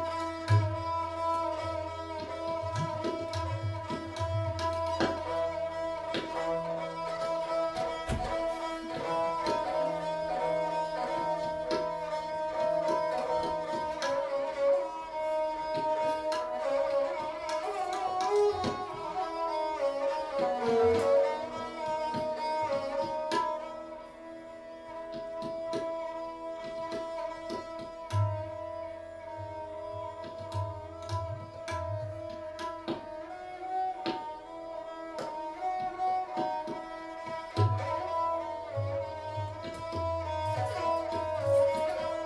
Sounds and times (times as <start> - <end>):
Carnatic music: 0.0 - 42.2
Classical music: 0.0 - 42.2
Sitar: 0.0 - 42.2
String section: 0.0 - 42.2
Tabla: 0.0 - 42.2.